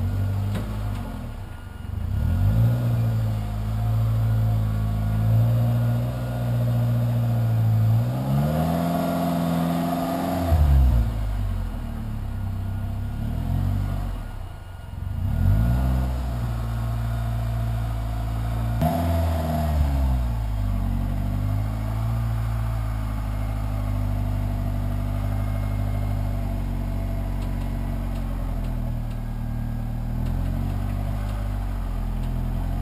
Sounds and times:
Car: 0.0 - 32.8.

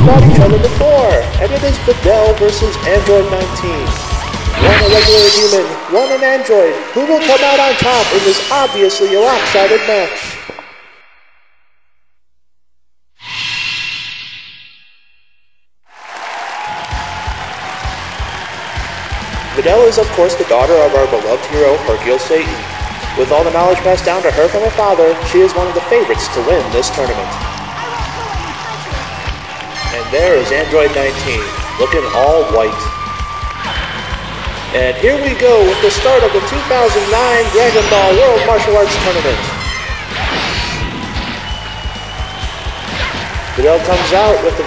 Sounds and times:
Music: 0.0 - 9.8, 16.1 - 44.6
Speech: 0.0 - 10.4, 19.6 - 22.6, 23.2 - 29.0, 29.9 - 32.9, 34.8 - 39.6, 43.6 - 44.6.

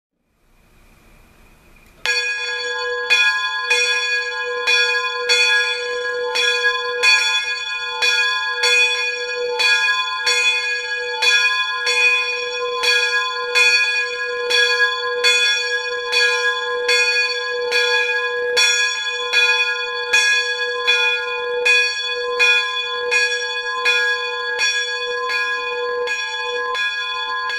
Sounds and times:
Church bell: 2.0 - 27.5.

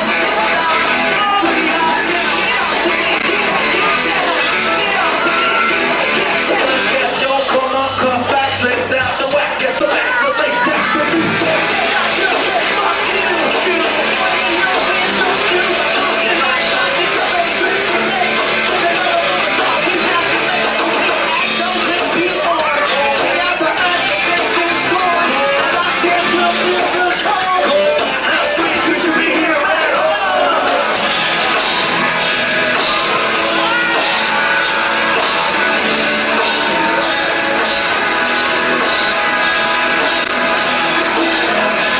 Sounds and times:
Music: 0.0 - 41.9.

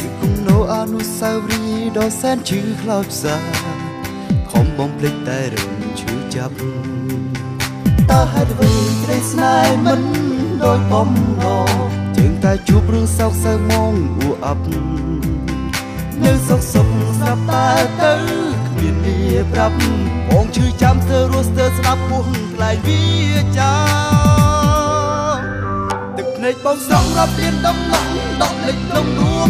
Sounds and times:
Music: 0.0 - 29.4
Singing: 8.1 - 14.8, 16.2 - 25.4, 26.2 - 29.4.

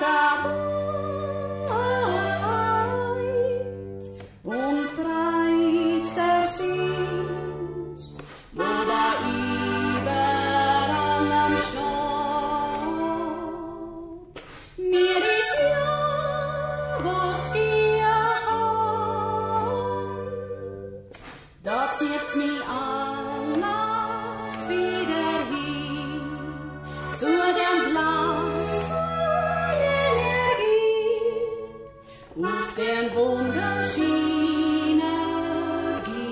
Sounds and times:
Accordion: 0.0 - 36.3.

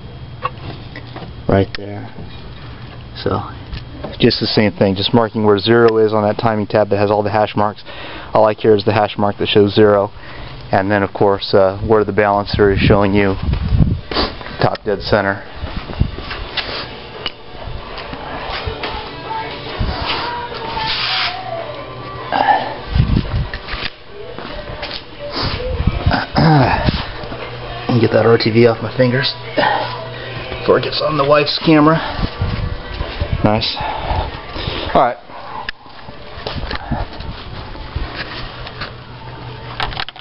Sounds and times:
Music: 18.2 - 23.2.

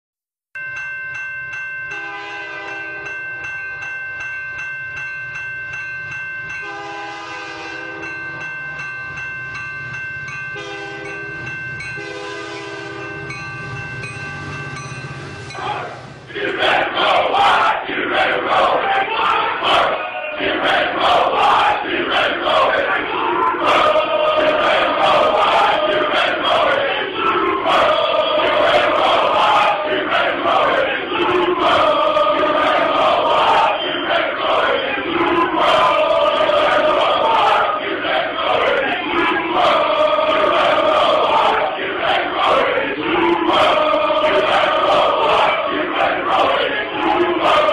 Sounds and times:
Train horn: 2.0 - 3.1, 6.6 - 8.1, 10.6 - 11.2, 12.0 - 13.2.

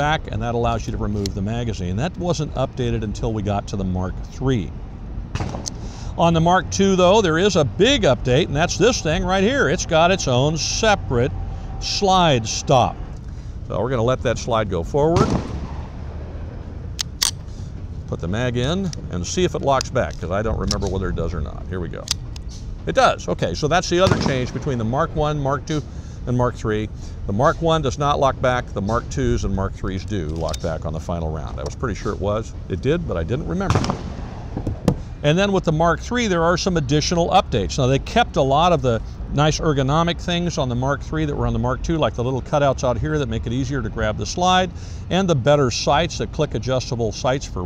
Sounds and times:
Speech: 0.0 - 4.8, 6.2 - 13.0, 13.7 - 15.4, 18.1 - 22.2, 22.9 - 33.8, 35.2 - 47.6
Outside, urban or manmade: 0.0 - 47.6.

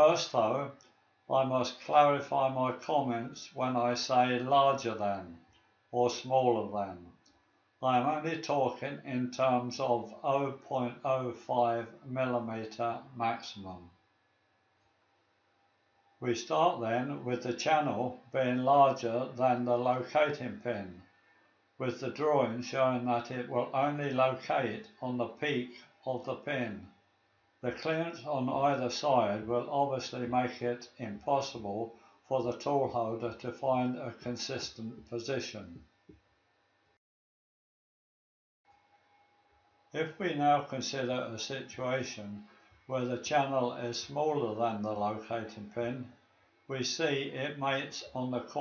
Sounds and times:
Speech: 0.0 - 5.4, 6.0 - 7.1, 7.8 - 14.0, 16.2 - 21.0, 21.8 - 26.9, 27.6 - 35.8, 40.0 - 48.6.

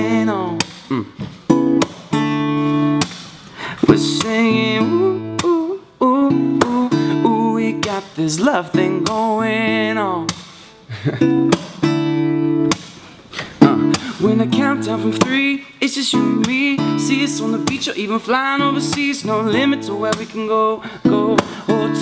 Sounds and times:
Music: 0.0 - 22.0.

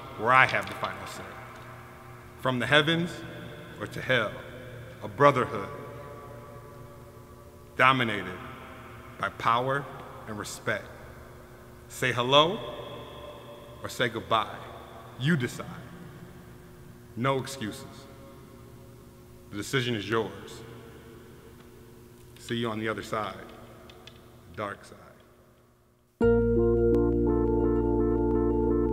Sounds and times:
Speech: 0.0 - 1.4, 2.4 - 6.0, 7.8 - 8.4, 9.2 - 11.0, 11.9 - 12.8, 13.8 - 15.9, 17.2 - 18.1, 19.5 - 20.7, 22.4 - 23.6, 24.5 - 25.3.

